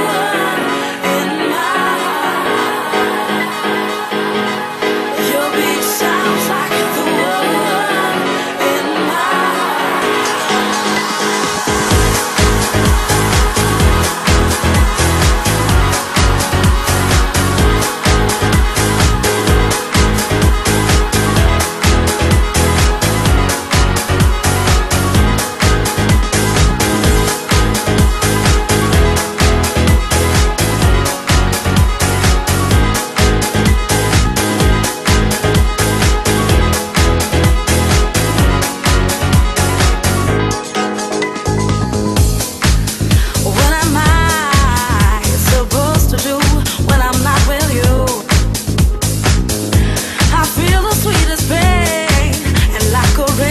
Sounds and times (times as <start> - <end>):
Music: 0.0 - 53.5.